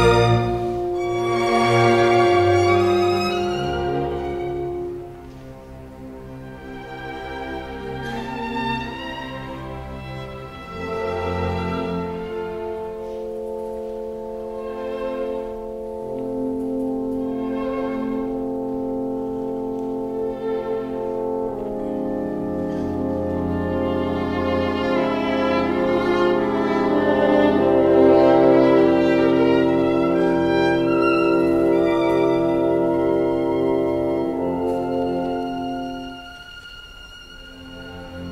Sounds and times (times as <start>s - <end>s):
Violin, fiddle: 0.0s - 22.0s, 22.6s - 38.3s
Cello: 0.0s - 38.3s.